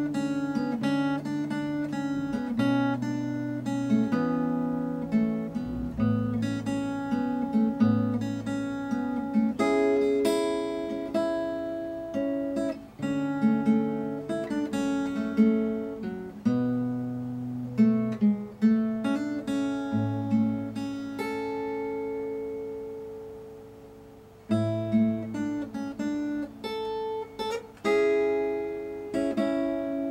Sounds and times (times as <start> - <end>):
Strum: 0.0 - 11.9
Acoustic guitar: 0.0 - 30.1.